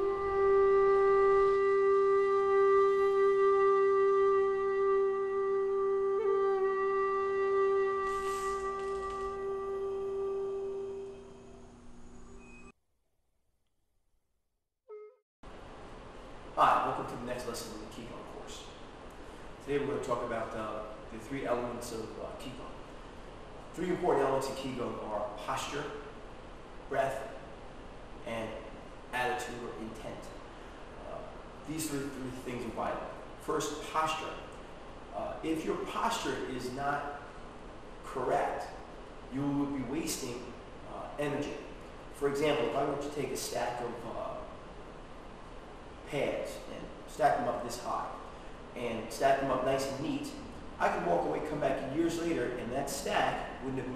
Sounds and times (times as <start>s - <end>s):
Speech: 16.6s - 18.8s, 19.6s - 22.8s, 23.8s - 26.1s, 26.9s - 27.4s, 28.3s - 30.4s, 31.0s - 34.5s, 35.2s - 37.2s, 38.1s - 44.6s, 46.1s - 48.2s, 48.8s - 53.9s.